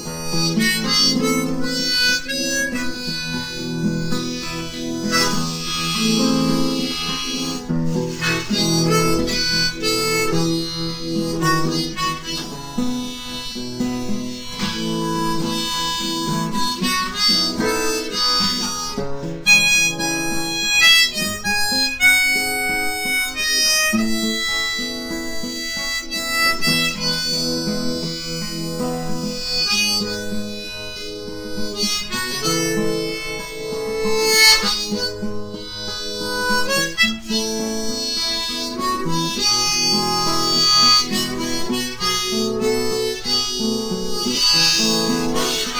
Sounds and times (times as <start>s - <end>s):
Music: 0.0s - 45.7s.